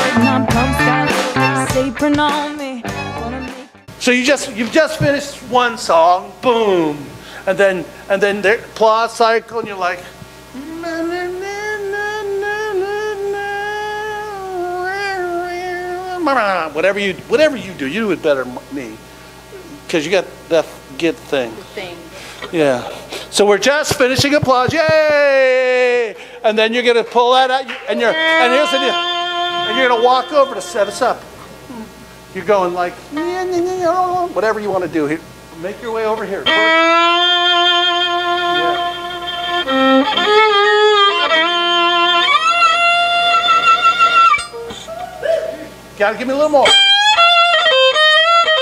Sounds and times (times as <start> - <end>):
Music: 0.0 - 4.0, 27.7 - 31.1, 36.4 - 44.9, 46.6 - 48.6
Inside, public space: 0.0 - 8.0, 8.6 - 48.6
Speech: 22.5 - 29.0, 29.7 - 31.2, 32.4 - 36.7, 46.0 - 46.7.